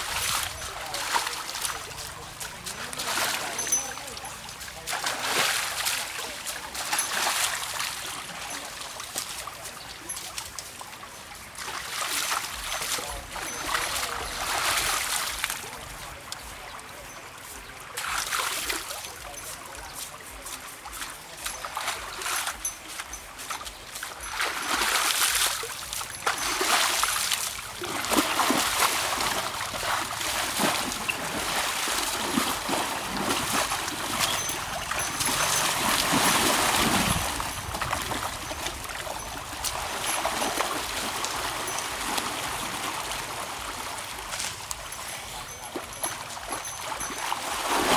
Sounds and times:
Trickle, dribble: 0.0s - 47.9s.

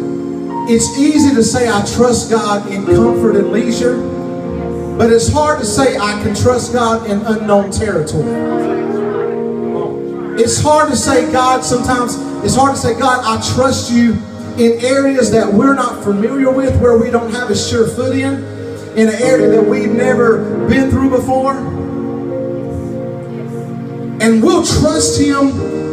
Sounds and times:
Music: 0.0s - 25.9s
Speech: 0.7s - 4.0s, 5.0s - 9.0s, 9.8s - 18.4s, 19.0s - 21.8s, 24.2s - 25.7s.

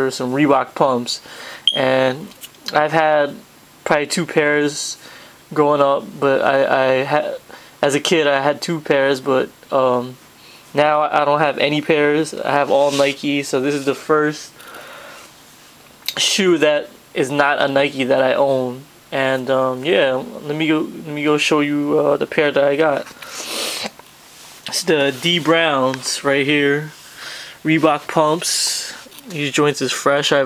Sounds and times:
Speech: 0.0s - 14.6s, 16.1s - 23.1s, 24.7s - 27.0s, 27.6s - 30.4s.

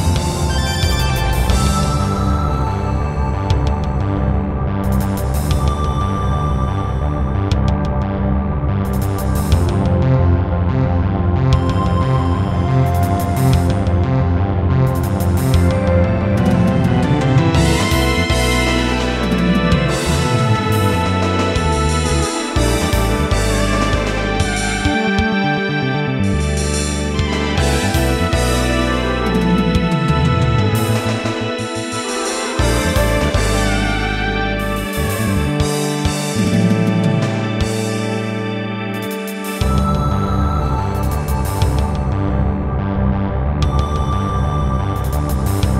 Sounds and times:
Music: 0.0s - 45.7s.

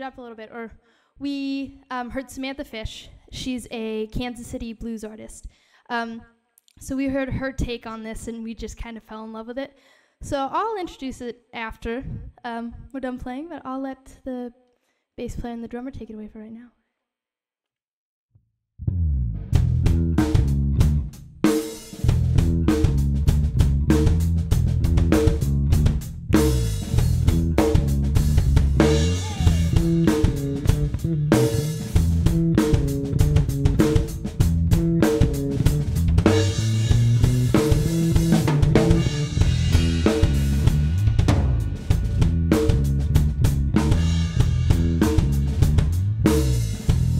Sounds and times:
Blues: 19.5s - 47.1s.

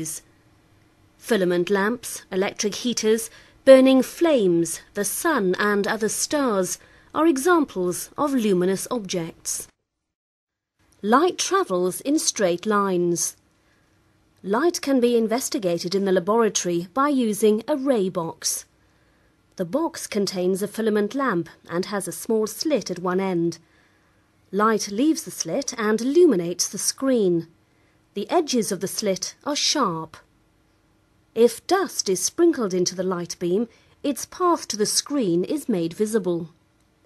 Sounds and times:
Speech: 0.0s - 0.2s, 1.2s - 9.7s, 11.0s - 13.4s, 14.4s - 18.7s, 19.6s - 23.6s, 24.6s - 27.5s, 28.2s - 30.3s, 31.4s - 36.6s.

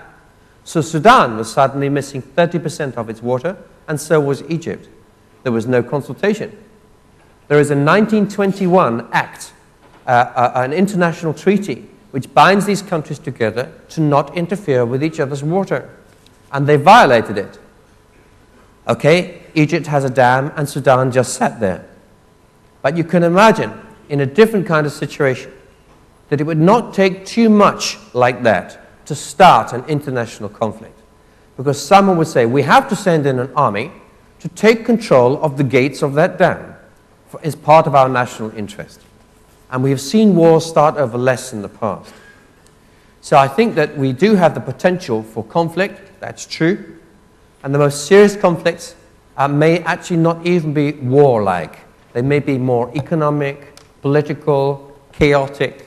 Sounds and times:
Speech: 0.0s - 6.6s, 7.5s - 17.7s, 18.9s - 22.0s, 22.8s - 25.6s, 26.3s - 31.0s, 31.6s - 39.1s, 39.7s - 42.2s, 43.2s - 47.0s, 47.6s - 55.8s.

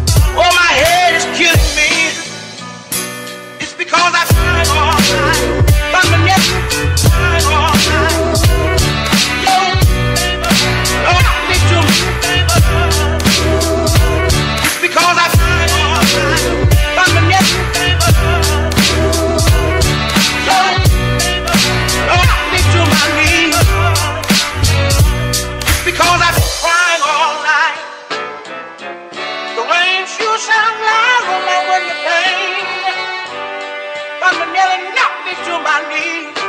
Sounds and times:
Music: 0.0s - 36.4s.

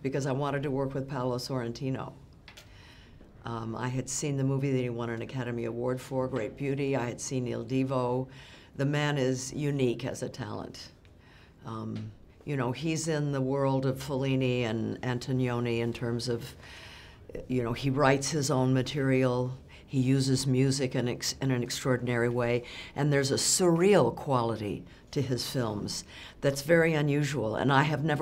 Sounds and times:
Speech: 0.0s - 2.2s, 3.4s - 11.0s, 11.6s - 16.6s, 17.3s - 28.2s.

